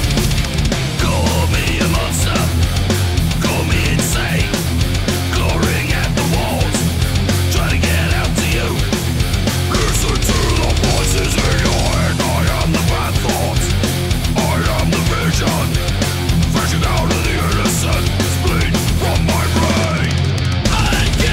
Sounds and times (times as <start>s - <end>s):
Music: 0.0s - 21.3s.